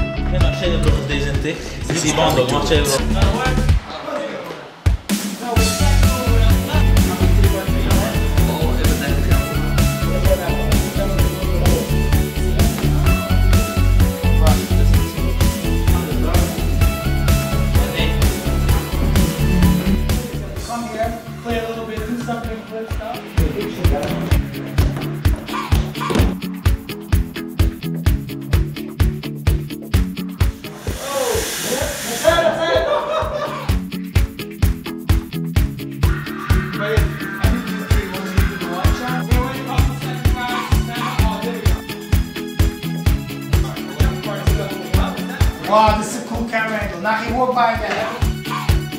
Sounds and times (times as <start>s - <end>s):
Music: 0.0s - 48.9s
Speech: 0.4s - 4.7s, 20.6s - 24.3s, 36.8s - 41.8s, 43.6s - 48.2s.